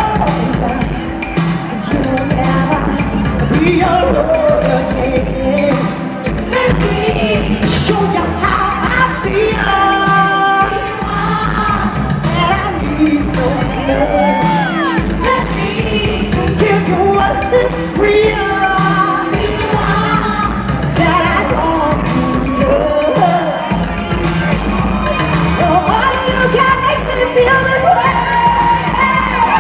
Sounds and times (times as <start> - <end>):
Music: 0.0 - 29.6.